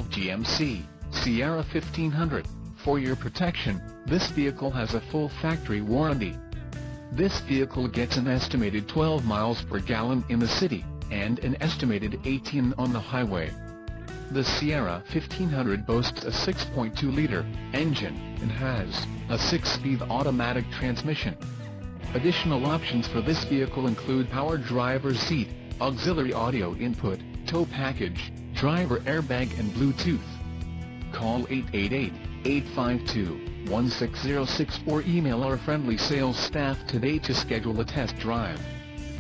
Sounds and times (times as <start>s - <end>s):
Speech: 0.0s - 6.4s, 7.2s - 13.6s, 14.3s - 21.4s, 22.2s - 30.4s, 31.2s - 38.7s
Music: 0.0s - 39.2s.